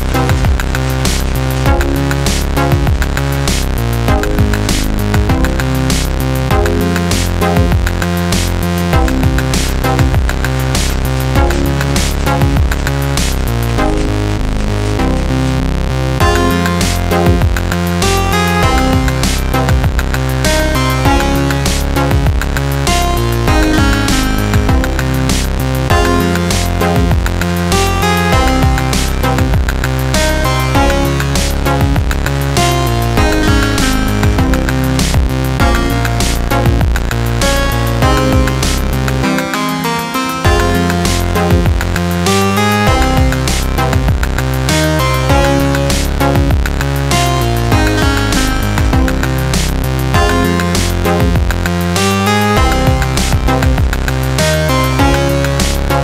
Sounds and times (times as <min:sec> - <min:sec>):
Music: 0:00.0 - 0:56.0.